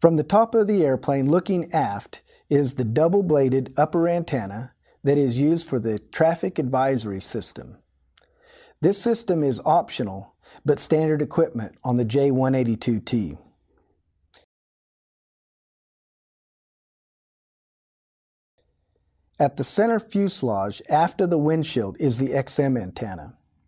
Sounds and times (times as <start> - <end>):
Speech: 0.0 - 7.8, 8.8 - 13.5, 19.4 - 23.4.